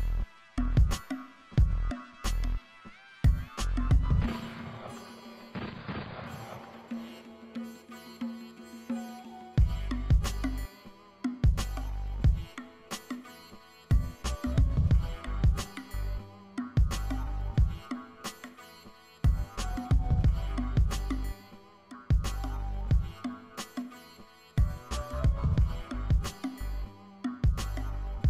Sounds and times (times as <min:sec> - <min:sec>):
Music: 0:00.0 - 0:28.3.